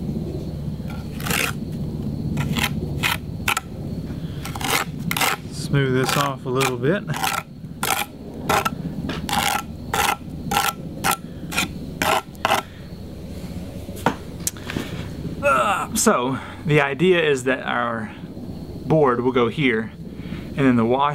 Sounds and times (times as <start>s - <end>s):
Outside, rural or natural: 0.0s - 21.1s
Speech: 5.6s - 7.1s, 15.4s - 18.2s, 18.9s - 20.0s, 20.6s - 21.1s.